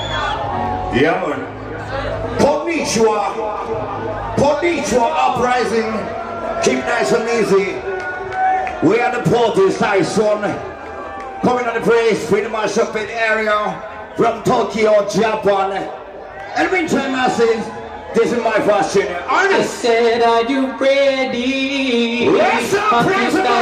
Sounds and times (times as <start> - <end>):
Speech: 0.9 - 3.5, 4.4 - 7.8, 8.8 - 10.6, 11.4 - 15.9, 16.6 - 23.6.